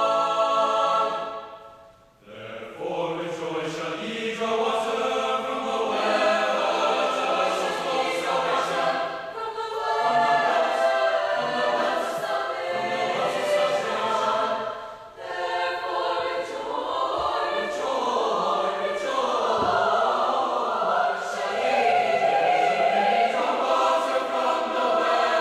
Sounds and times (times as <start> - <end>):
Music: 0.0 - 25.4.